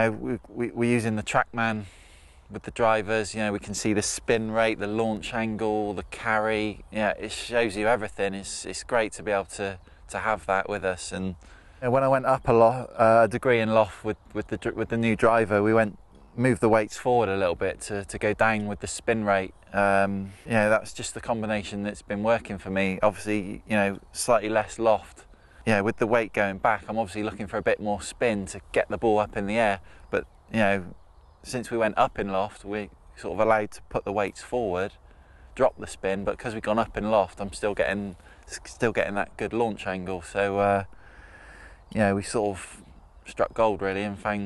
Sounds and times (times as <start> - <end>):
Speech: 0.0 - 1.9, 2.5 - 35.0, 35.6 - 40.9, 41.8 - 44.4.